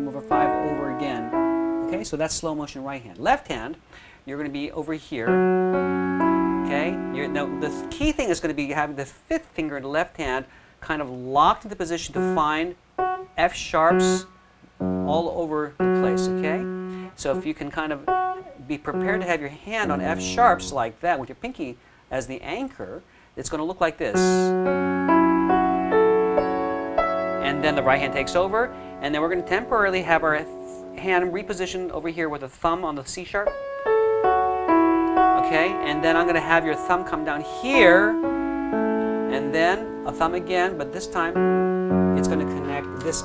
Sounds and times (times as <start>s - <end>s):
Speech: 0.0s - 1.3s, 1.9s - 5.4s, 6.7s - 12.8s, 13.4s - 14.3s, 15.1s - 24.6s, 27.4s - 33.5s, 35.4s - 38.2s, 39.3s - 41.4s, 42.2s - 43.2s
Piano: 0.0s - 2.3s, 4.9s - 8.9s, 12.0s - 21.0s, 24.1s - 32.4s, 33.3s - 43.2s.